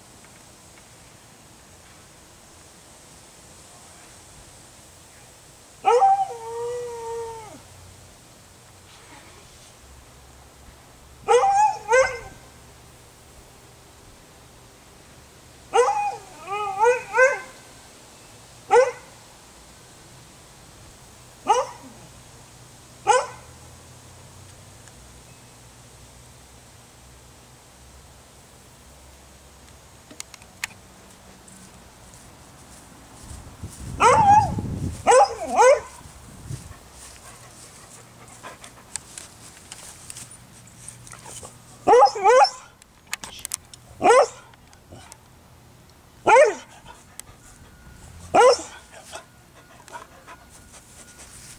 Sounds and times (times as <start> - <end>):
Bow-wow: 11.3 - 12.4, 18.7 - 19.1, 21.5 - 22.0, 23.1 - 23.5, 34.0 - 36.0, 44.0 - 44.4, 46.2 - 46.7, 48.3 - 49.2.